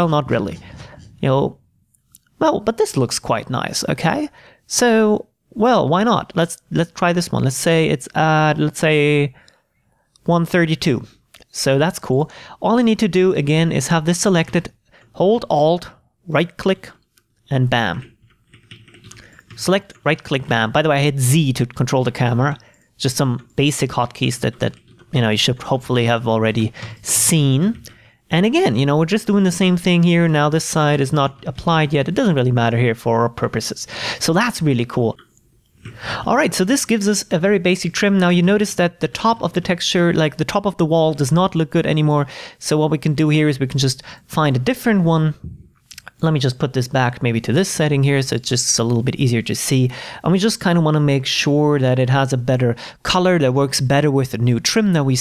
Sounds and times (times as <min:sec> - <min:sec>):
Speech: 0:00.0 - 0:01.6, 0:02.4 - 0:09.4, 0:10.2 - 0:18.1, 0:19.5 - 0:35.2, 0:36.2 - 0:55.2.